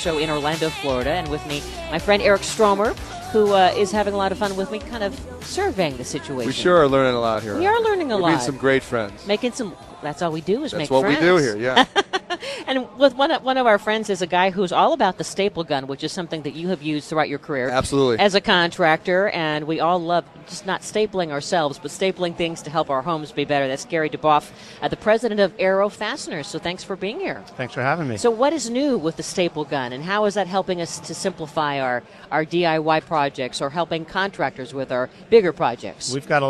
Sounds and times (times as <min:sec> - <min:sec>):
Speech: 0:00.0 - 0:11.8, 0:19.0 - 0:36.5.